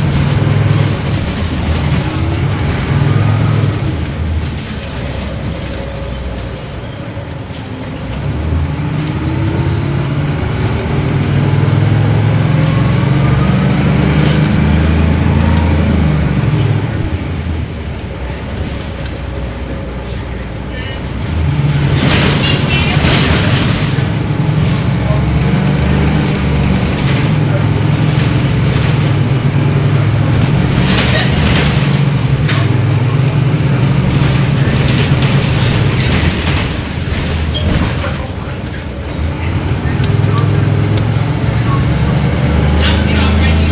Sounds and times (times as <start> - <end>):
Bus: 0.0 - 43.7.